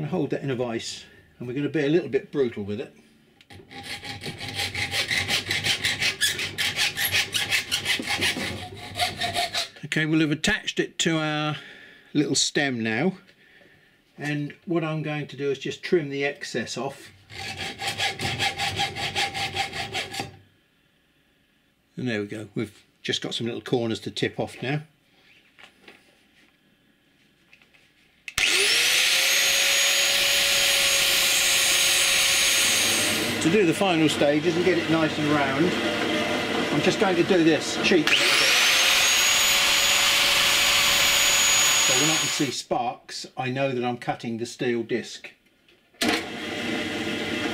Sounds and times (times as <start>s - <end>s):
Filing (rasp): 3.5s - 9.8s, 17.3s - 20.4s, 28.4s - 33.5s, 37.8s - 42.5s.